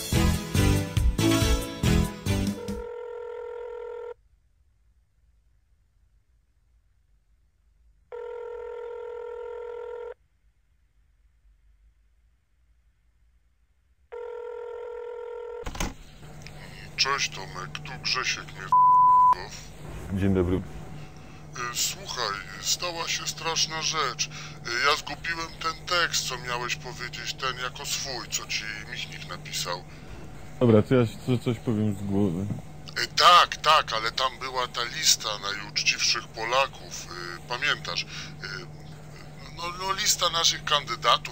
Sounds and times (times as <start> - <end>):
Telephone: 2.6 - 4.2, 8.2 - 10.2, 14.2 - 15.9.